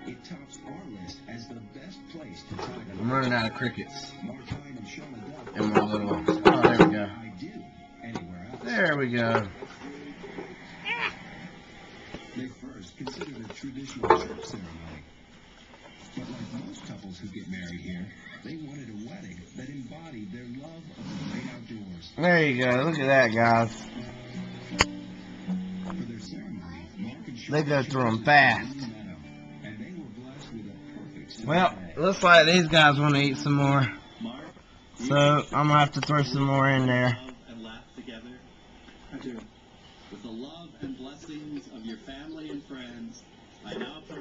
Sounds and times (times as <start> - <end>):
Speech: 0.0 - 10.3, 12.3 - 15.1, 16.2 - 24.0, 25.9 - 38.5, 40.1 - 44.2
Music: 0.0 - 13.3, 18.5 - 34.4.